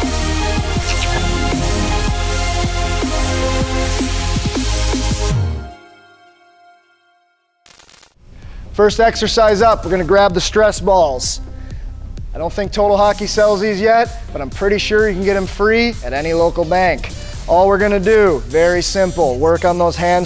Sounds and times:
Music: 0:00.0 - 0:20.2
Speech: 0:00.8 - 0:02.2, 0:08.8 - 0:11.4, 0:12.4 - 0:20.2.

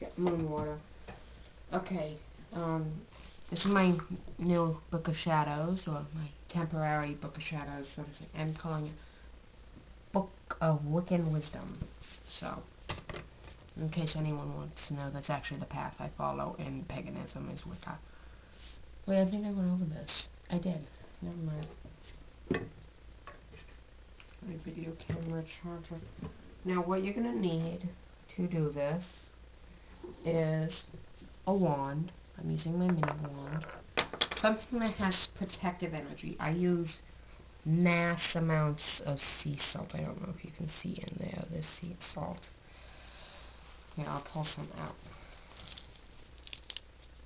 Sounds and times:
Speech: 0:00.0 - 0:00.9, 0:01.7 - 0:09.0, 0:10.2 - 0:12.7, 0:13.8 - 0:18.0, 0:19.1 - 0:21.8, 0:24.4 - 0:29.4, 0:30.1 - 0:33.8, 0:34.4 - 0:42.6, 0:44.0 - 0:45.0.

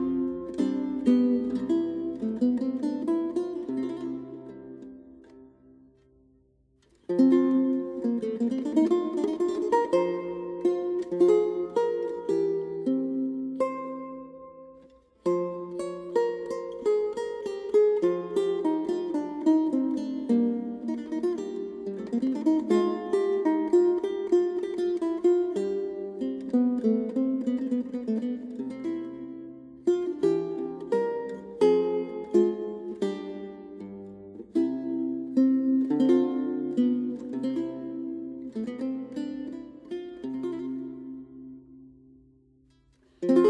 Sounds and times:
Music: 0:00.0 - 0:43.4.

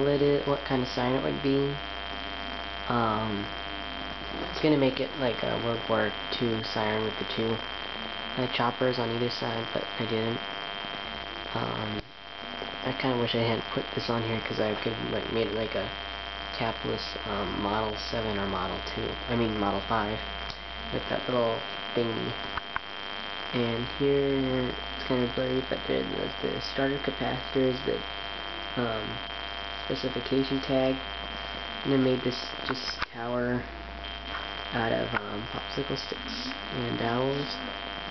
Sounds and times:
Speech: 0:00.0 - 0:01.9, 0:02.9 - 0:03.6, 0:04.3 - 0:07.7, 0:08.4 - 0:10.4, 0:11.5 - 0:12.1, 0:12.8 - 0:22.4, 0:23.5 - 0:28.1, 0:28.8 - 0:31.1, 0:31.8 - 0:33.7, 0:34.7 - 0:37.7.

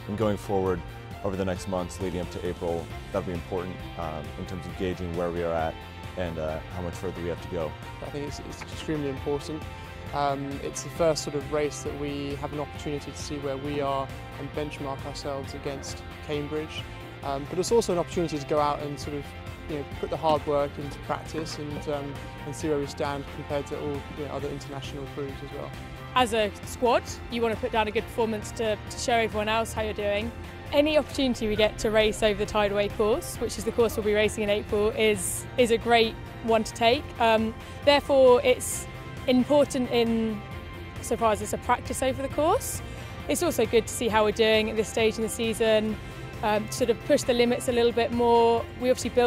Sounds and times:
Music: 0:00.0 - 0:49.2.

